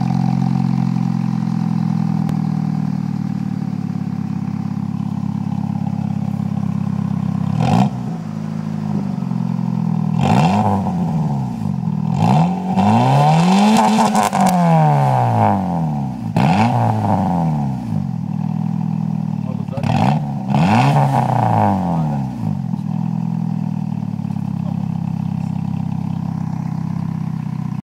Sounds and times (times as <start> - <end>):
Speech: 19.4 - 20.0, 21.8 - 23.0, 24.5 - 25.6.